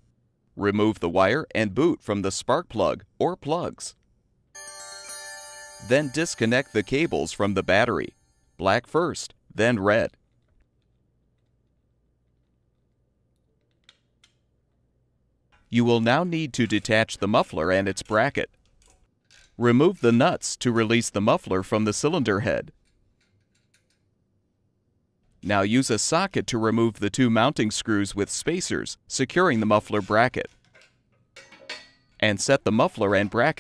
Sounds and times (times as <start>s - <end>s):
Speech: 0.6s - 4.0s, 5.8s - 10.2s, 15.7s - 18.5s, 19.6s - 22.7s, 25.4s - 30.6s, 32.2s - 33.6s.